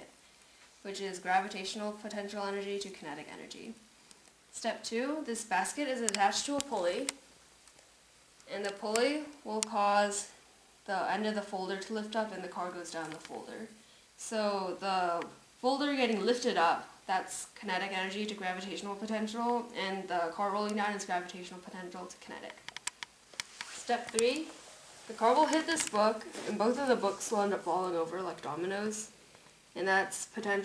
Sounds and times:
Speech: 0.8 - 3.8, 4.5 - 7.2, 8.5 - 22.6, 23.8 - 29.2, 29.8 - 30.6.

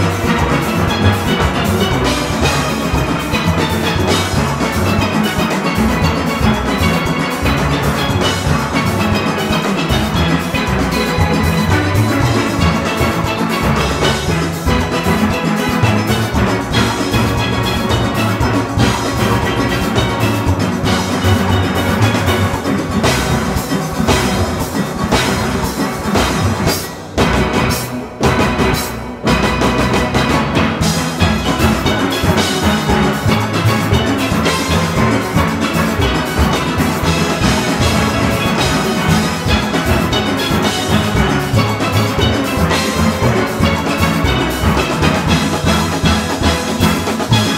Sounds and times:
Steelpan: 0.0 - 47.5.

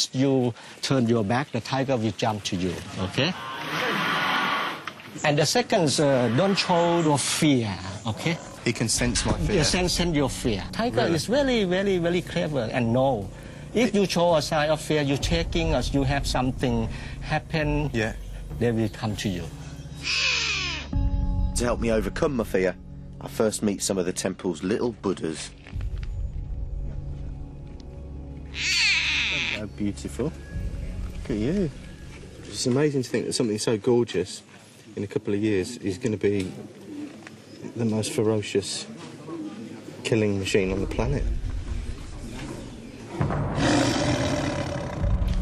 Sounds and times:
Music: 8.6 - 33.1, 40.8 - 45.4.

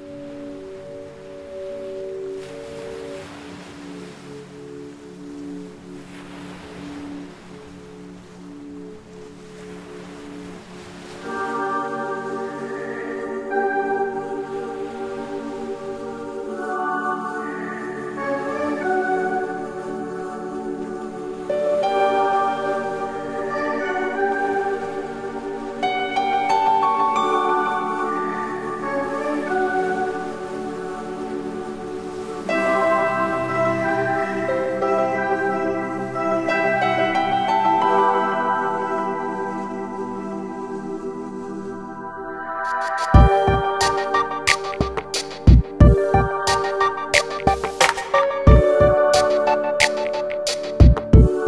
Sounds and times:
Music: 0.0 - 51.4.

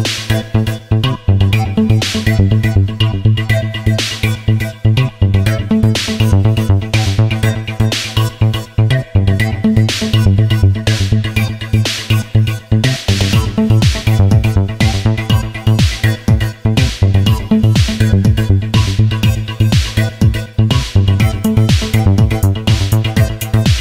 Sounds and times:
Electronica: 0.0 - 23.8.

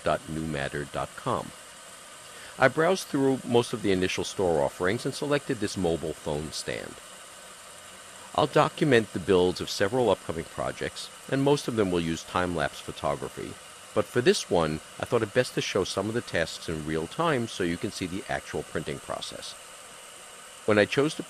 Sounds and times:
Speech: 0.0 - 1.6, 2.6 - 7.0, 8.3 - 19.6, 20.7 - 21.3.

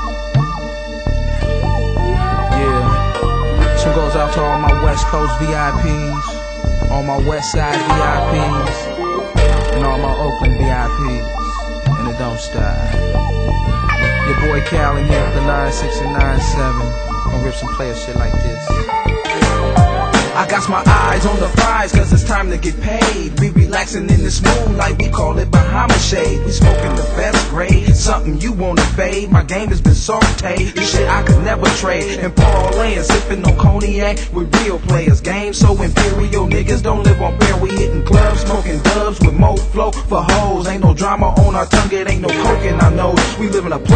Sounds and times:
Blues: 0.0 - 43.9.

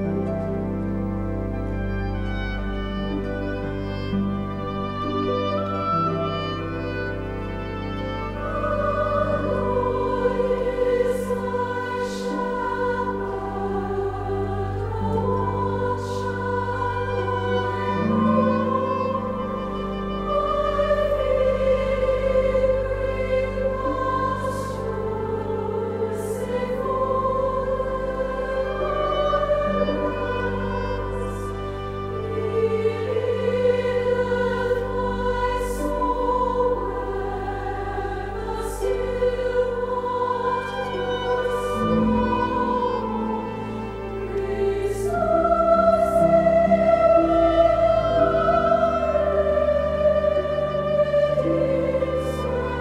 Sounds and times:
Choir: 0.0 - 52.8.

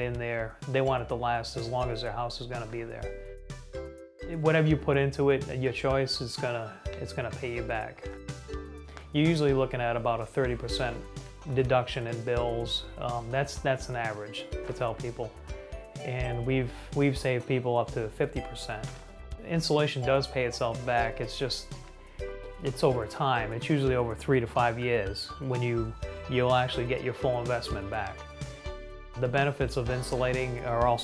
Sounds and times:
Speech: 0.0 - 3.1, 4.3 - 8.0, 9.2 - 15.3, 16.0 - 21.7, 22.6 - 28.2, 29.2 - 31.0
Music: 0.0 - 31.0.

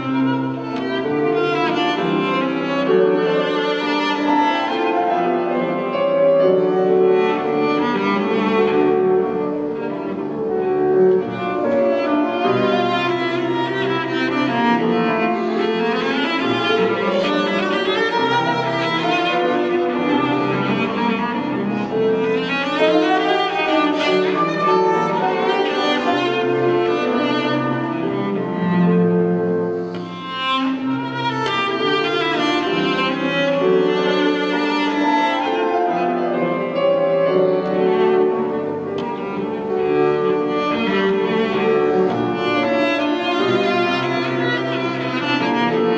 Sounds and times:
Cello: 0.0 - 45.9.

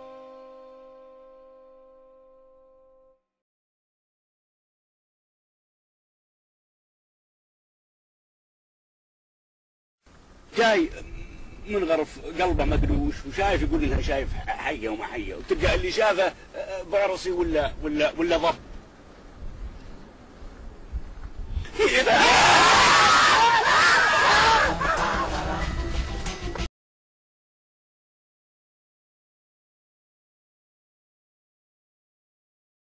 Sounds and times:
Speech: 10.5 - 18.6, 21.8 - 22.3.

